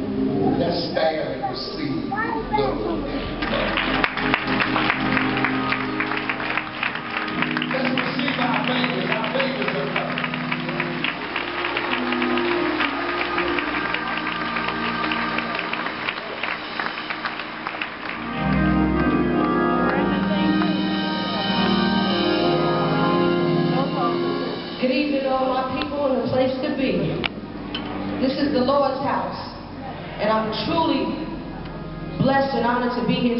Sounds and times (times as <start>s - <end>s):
Music: 2.0s - 33.3s
Speech: 7.7s - 10.2s.